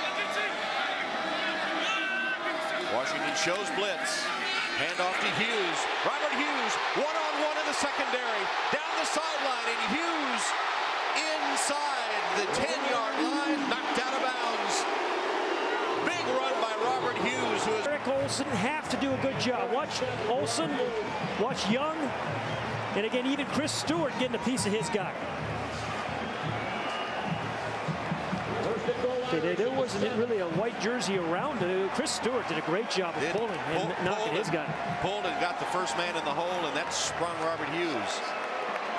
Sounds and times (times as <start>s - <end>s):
Speech: 2.6s - 14.9s, 16.0s - 22.1s, 23.0s - 25.2s, 28.6s - 38.3s.